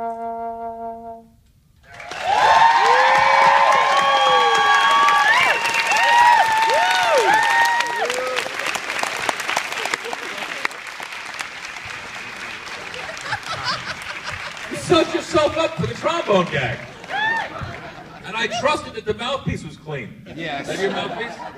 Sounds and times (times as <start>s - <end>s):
Applause: 1.9s - 18.2s
Speech: 14.7s - 16.9s, 18.2s - 21.5s.